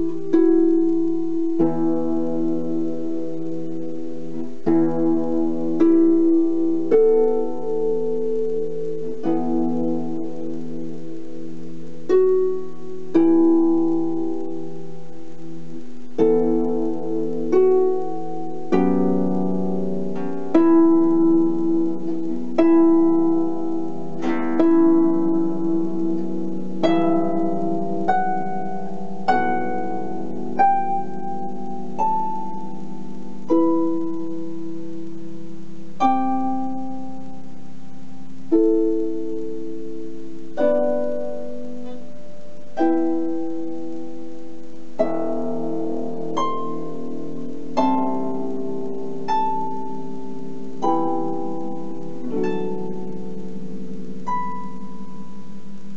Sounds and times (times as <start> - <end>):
Music: 0.0 - 55.9.